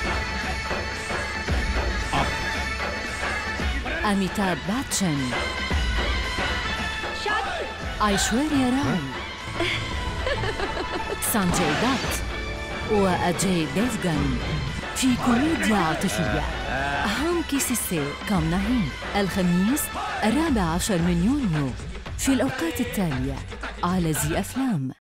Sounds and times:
Music: 0.0s - 25.0s
Speech: 4.0s - 5.4s, 8.0s - 9.2s, 11.2s - 12.2s, 12.9s - 25.0s.

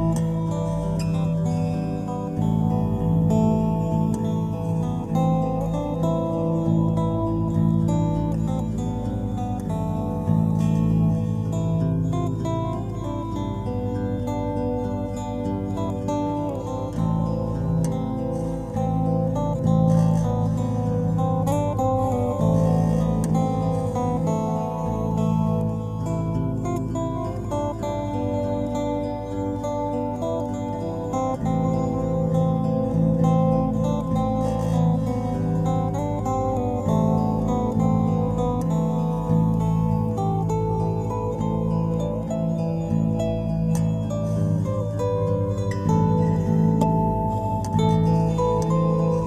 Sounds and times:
Music: 0.0s - 49.2s.

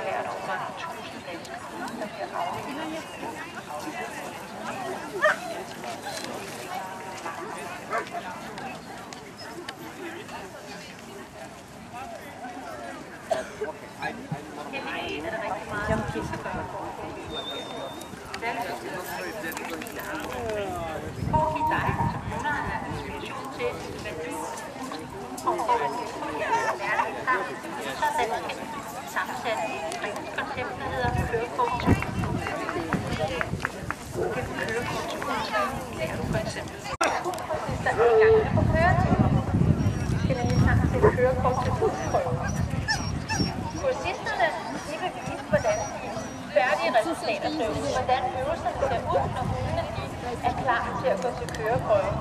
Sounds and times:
Speech: 0.0s - 52.2s.

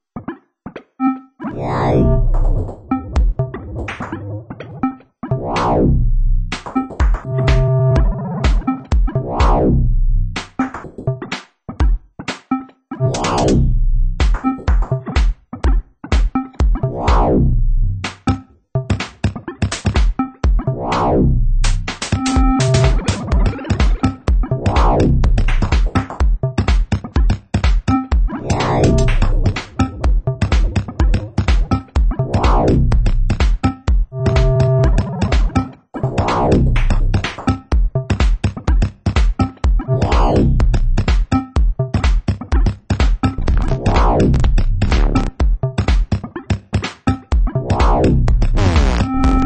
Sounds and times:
Electronic music: 1.0s - 11.4s, 12.3s - 49.4s
Synthesizer: 1.0s - 11.4s, 12.3s - 15.4s, 16.1s - 49.4s.

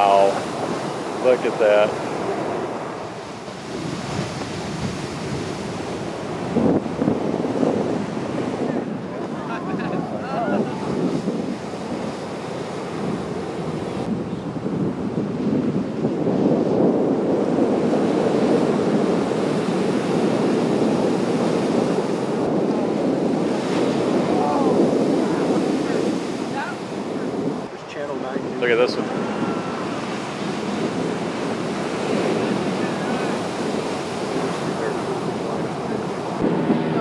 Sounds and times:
Waves, surf: 0.0s - 37.0s.

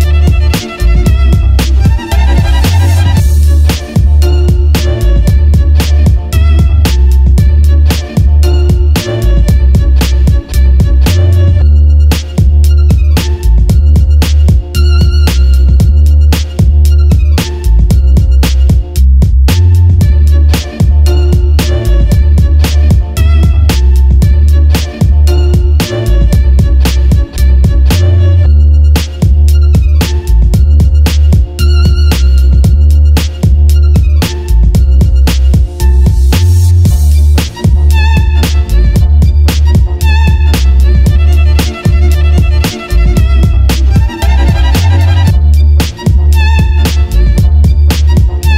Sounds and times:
Music: 0.0s - 48.5s.

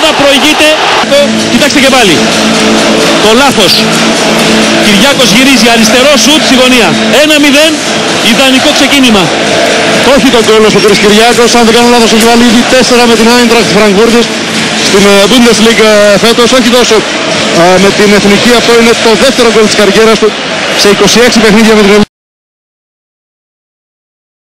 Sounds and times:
Speech: 0.0s - 2.2s, 4.9s - 9.3s, 10.1s - 17.0s, 17.6s - 22.1s.

